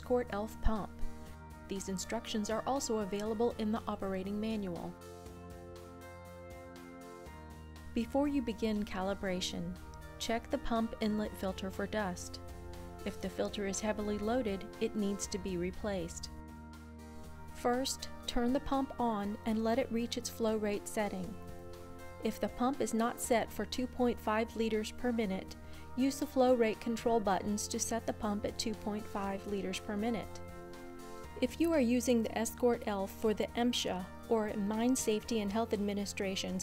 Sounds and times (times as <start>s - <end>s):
Speech: 0.0s - 0.9s, 1.7s - 5.0s, 8.0s - 12.4s, 13.1s - 16.3s, 17.6s - 21.4s, 22.2s - 30.3s, 31.4s - 36.6s
Music: 0.0s - 36.6s.